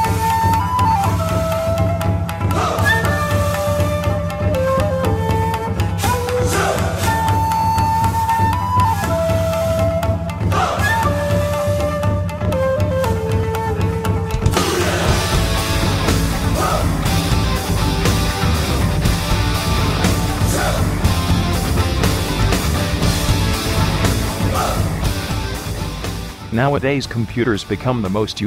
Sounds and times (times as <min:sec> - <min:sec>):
Music: 0:00.0 - 0:28.4.